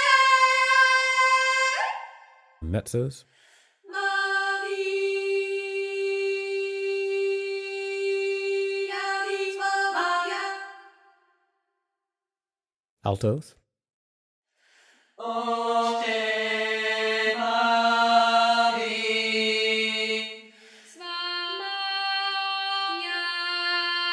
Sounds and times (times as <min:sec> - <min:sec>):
Choir: 0:00.0 - 0:02.4, 0:03.9 - 0:11.2, 0:15.1 - 0:24.1.